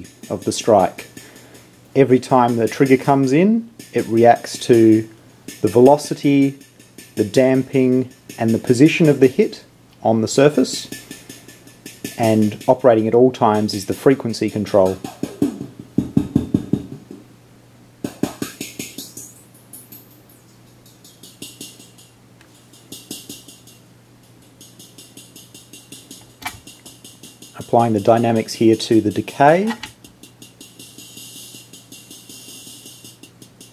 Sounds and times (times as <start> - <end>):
Speech: 0.0 - 1.1, 2.0 - 6.6, 7.2 - 10.9, 12.2 - 15.1, 27.6 - 29.8.